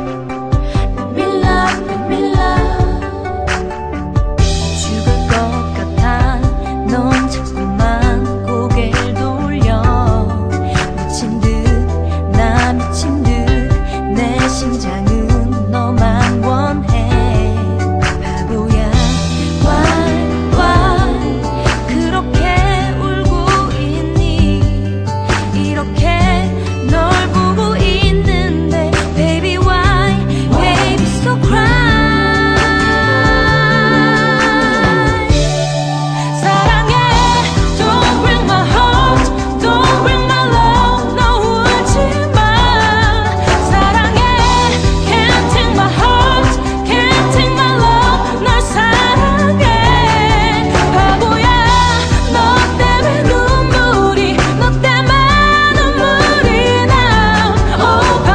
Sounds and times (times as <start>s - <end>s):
Pop music: 0.0s - 58.3s
Soundtrack music: 0.0s - 58.3s.